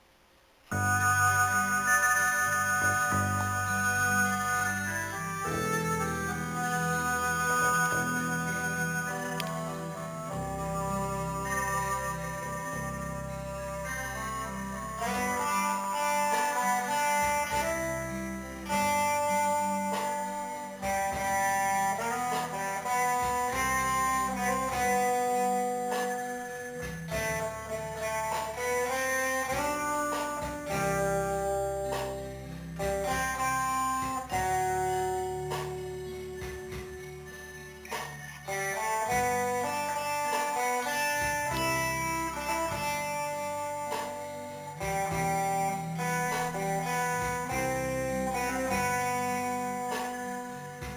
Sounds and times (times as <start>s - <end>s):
Electric guitar: 0.7s - 50.9s
Strum: 0.7s - 50.9s.